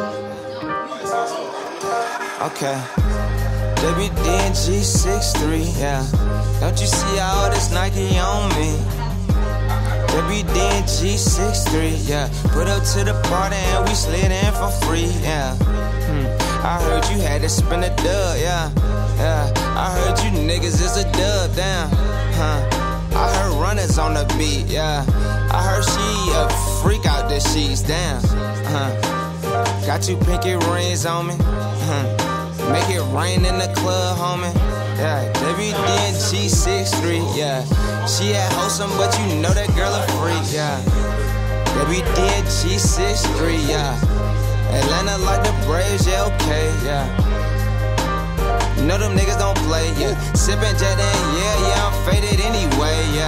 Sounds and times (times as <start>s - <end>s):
Music: 0.0s - 53.2s.